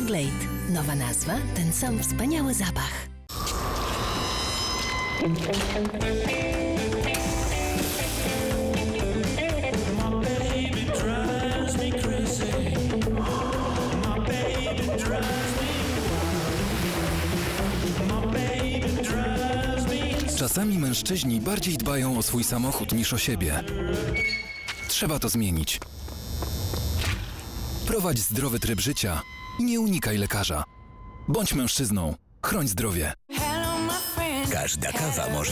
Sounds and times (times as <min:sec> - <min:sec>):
Music: 0:00.0 - 0:03.3, 0:04.0 - 0:24.6, 0:33.3 - 0:35.5.